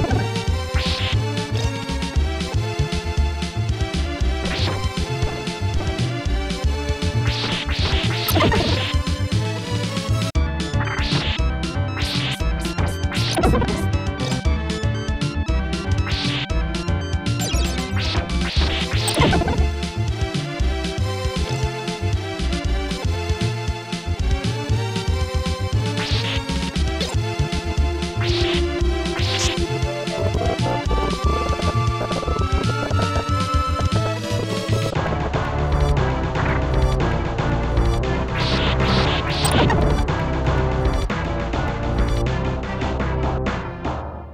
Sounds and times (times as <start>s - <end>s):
Music: 0.0s - 44.3s.